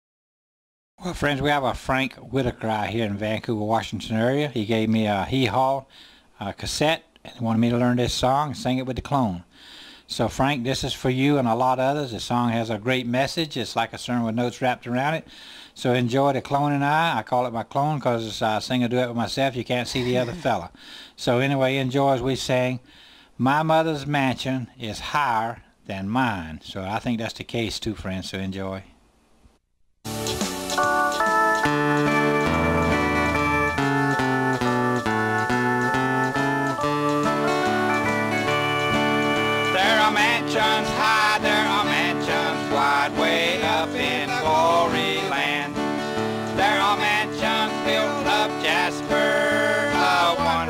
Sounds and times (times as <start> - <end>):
Speech: 1.0 - 9.5, 10.1 - 22.8, 23.4 - 28.9
Gospel music: 20.0 - 20.6, 30.1 - 50.7.